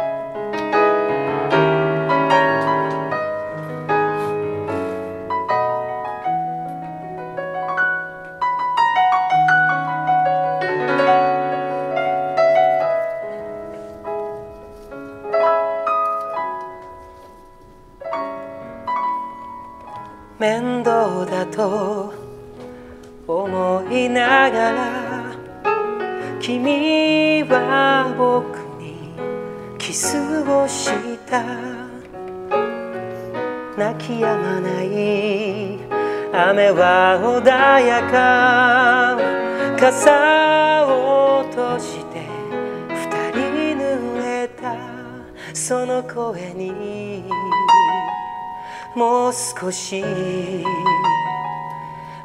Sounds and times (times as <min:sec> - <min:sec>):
Music: 0:00.0 - 0:52.2.